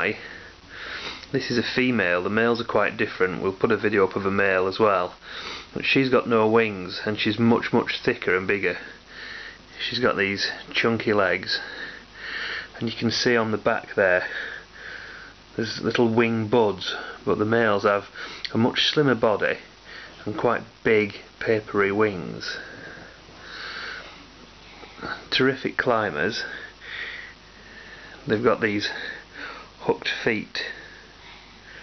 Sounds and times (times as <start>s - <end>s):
Speech: 0.0s - 0.3s, 1.3s - 5.2s, 5.8s - 9.0s, 9.8s - 11.7s, 12.8s - 14.3s, 15.6s - 22.7s, 25.0s - 26.6s, 28.3s - 29.1s, 29.8s - 30.9s.